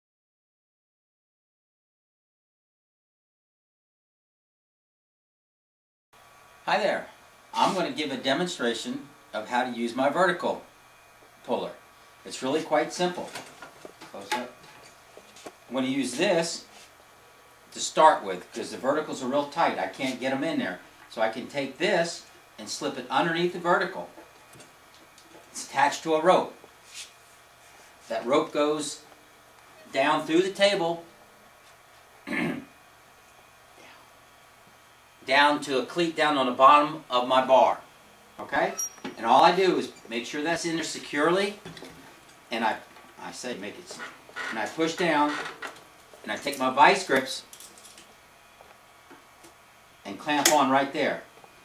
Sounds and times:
Speech: 6.7s - 10.7s, 11.4s - 13.4s, 14.1s - 14.6s, 15.7s - 16.7s, 17.7s - 24.2s, 25.5s - 26.6s, 28.1s - 29.1s, 29.9s - 31.1s, 35.2s - 41.7s, 42.5s - 45.5s, 46.2s - 47.5s, 50.0s - 51.3s.

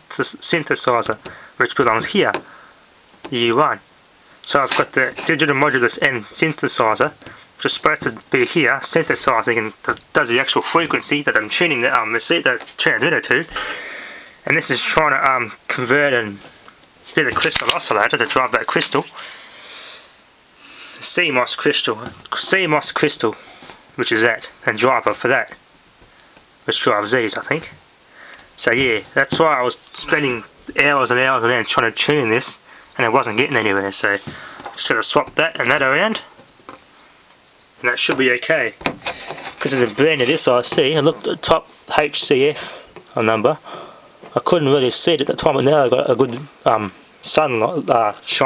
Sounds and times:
Speech: 0.0s - 2.4s, 3.3s - 3.8s, 4.5s - 13.6s, 14.4s - 16.5s, 17.1s - 19.3s, 21.0s - 23.4s, 24.0s - 25.6s, 26.6s - 27.8s, 28.6s - 36.3s, 37.8s - 38.8s, 39.6s - 43.7s, 44.3s - 48.4s.

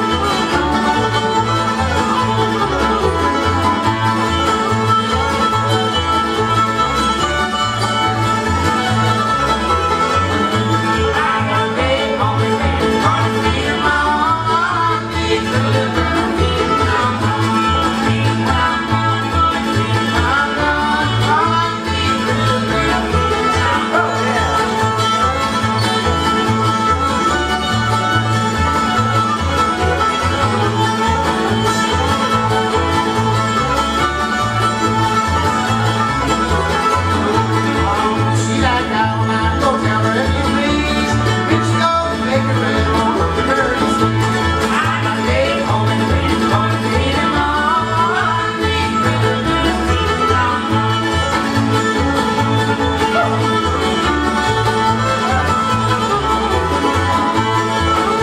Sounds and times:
Music: 0.0s - 58.2s.

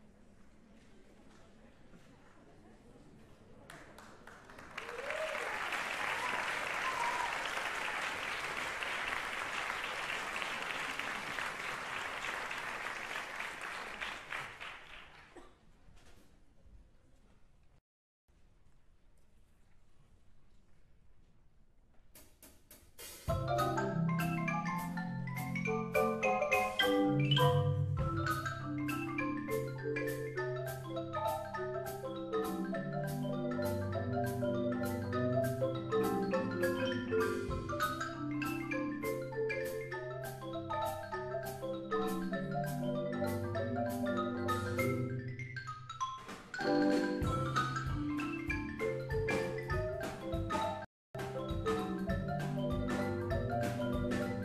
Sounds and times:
Glockenspiel: 23.3s - 54.4s
Marimba, xylophone: 23.3s - 54.4s.

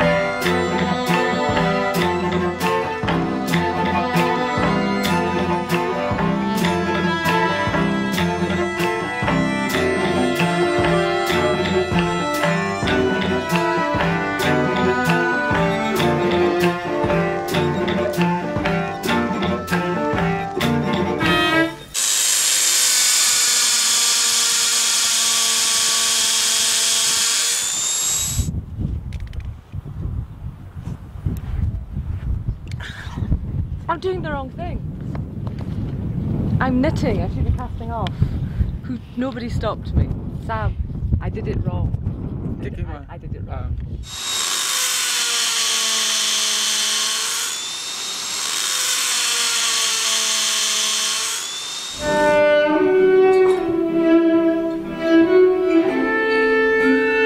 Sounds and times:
Violin, fiddle: 0.0s - 22.0s, 51.9s - 57.2s.

